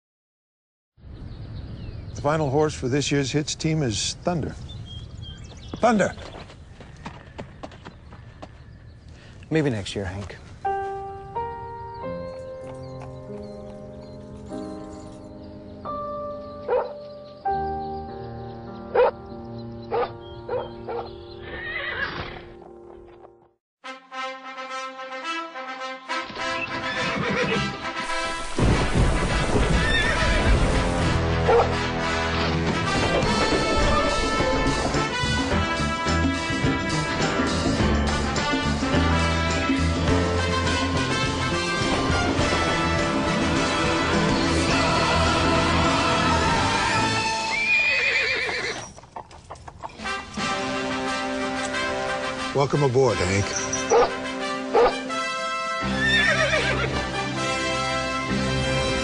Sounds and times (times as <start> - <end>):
Music: 10.6 - 47.9, 50.0 - 59.0
Neigh, whinny: 21.5 - 22.4, 26.7 - 27.8, 29.8 - 30.5, 47.4 - 49.0, 55.9 - 56.9.